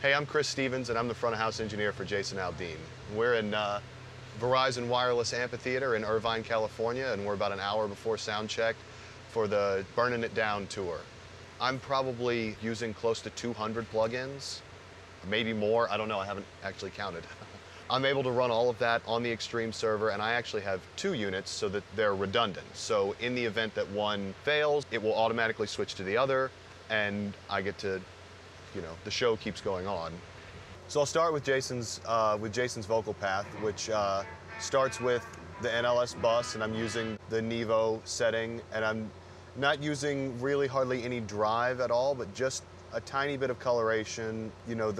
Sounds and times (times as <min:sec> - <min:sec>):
Speech: 0:00.0 - 0:03.8, 0:04.4 - 0:14.6, 0:15.2 - 0:28.1, 0:28.8 - 0:30.2, 0:30.9 - 0:45.0.